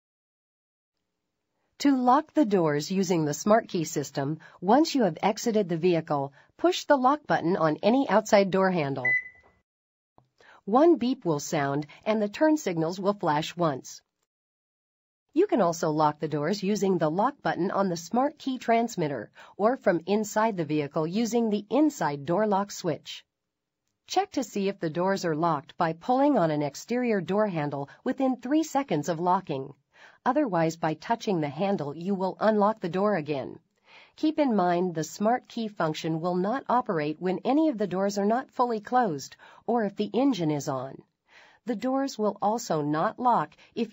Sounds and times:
Speech: 1.8 - 9.2, 10.6 - 14.0, 15.4 - 23.2, 24.1 - 33.6, 34.2 - 41.0, 41.7 - 43.9.

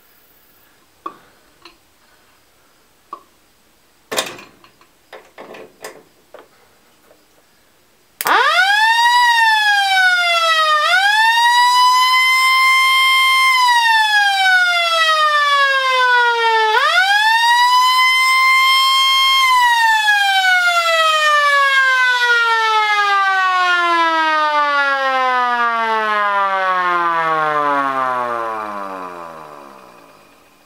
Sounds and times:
Siren: 8.2 - 30.6
Vehicle: 27.7 - 30.6.

